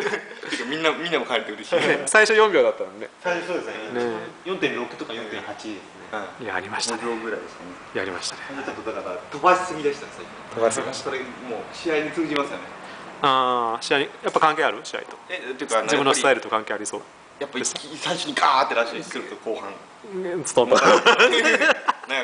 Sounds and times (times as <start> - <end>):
Inside, small room: 0.0 - 22.2.